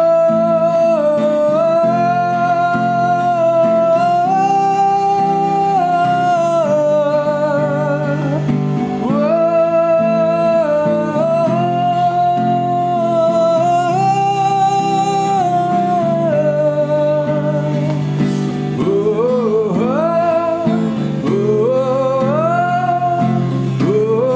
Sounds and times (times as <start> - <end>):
Music: 0.0 - 24.3
Singing: 0.0 - 24.3.